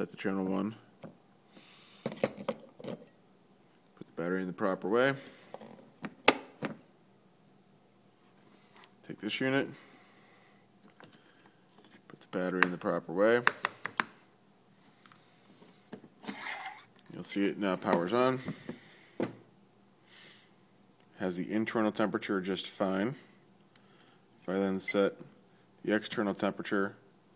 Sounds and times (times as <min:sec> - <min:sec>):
Speech: 0:00.0 - 0:00.9, 0:04.0 - 0:05.2, 0:09.0 - 0:09.8, 0:12.2 - 0:13.5, 0:17.1 - 0:18.4, 0:21.2 - 0:23.2, 0:24.4 - 0:27.0.